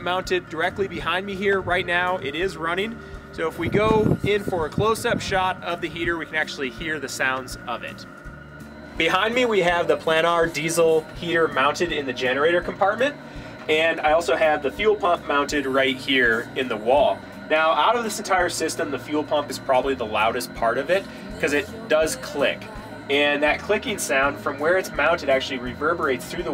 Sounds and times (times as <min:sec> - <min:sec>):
Speech: 0:00.0 - 0:08.0, 0:09.0 - 0:26.5.